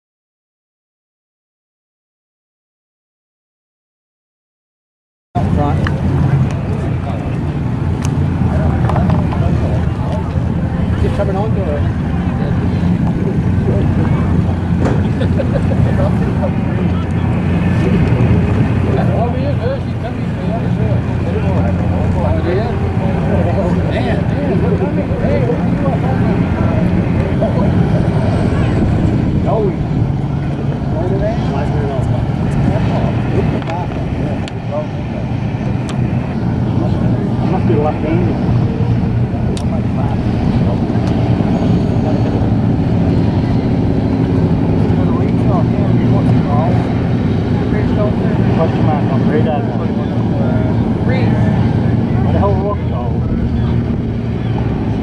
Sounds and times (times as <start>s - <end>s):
Speech: 5.4s - 7.7s, 8.3s - 55.0s
Motorboat, speedboat: 5.4s - 55.0s.